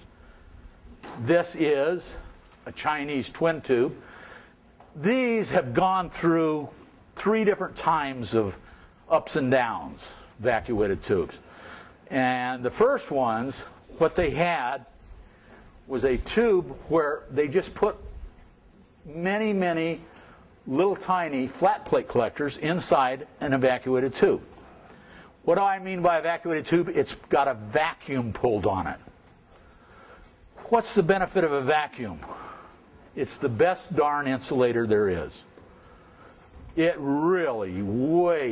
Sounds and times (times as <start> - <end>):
Speech: 1.1 - 4.0, 5.0 - 11.4, 12.1 - 15.0, 15.9 - 18.2, 19.0 - 24.5, 25.4 - 29.1, 30.6 - 32.4, 33.2 - 35.5, 36.7 - 38.5.